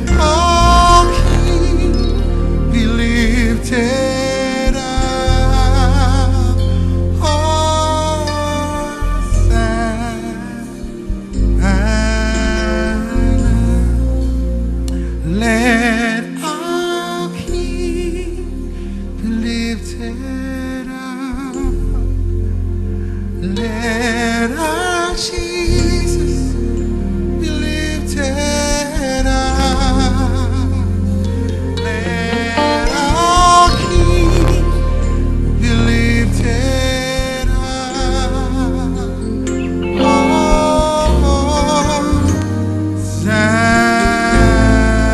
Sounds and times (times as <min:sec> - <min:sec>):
New-age music: 0:00.0 - 0:45.1.